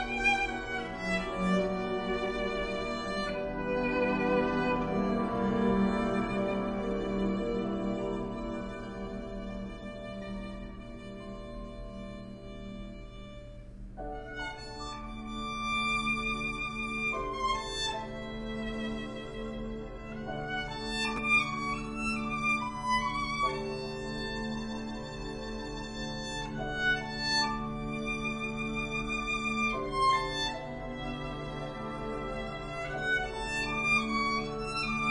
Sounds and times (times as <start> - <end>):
Violin, fiddle: 0.0 - 35.1.